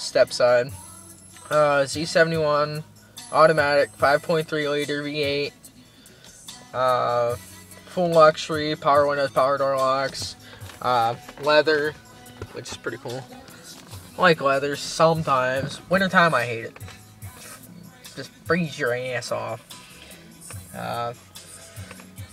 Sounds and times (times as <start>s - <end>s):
Music: 0.0s - 22.3s
Speech: 8.0s - 11.9s, 12.6s - 13.3s, 14.2s - 16.7s, 18.5s - 19.6s, 20.8s - 21.2s.